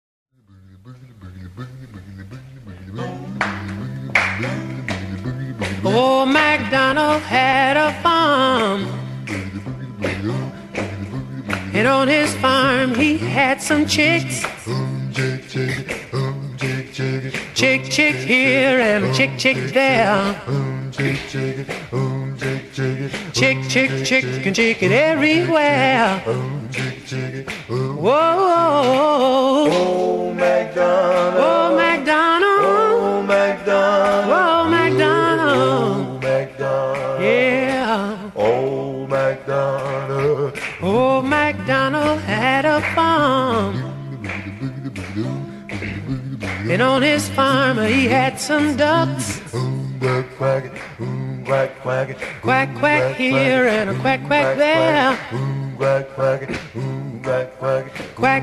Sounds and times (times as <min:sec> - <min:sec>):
Music: 0:01.9 - 0:58.4.